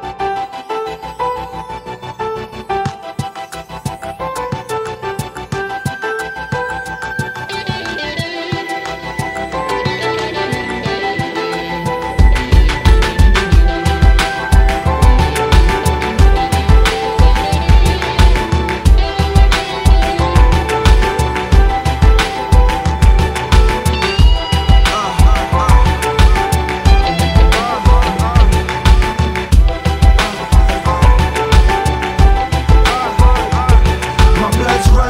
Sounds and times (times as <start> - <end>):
Music: 0.0 - 35.1.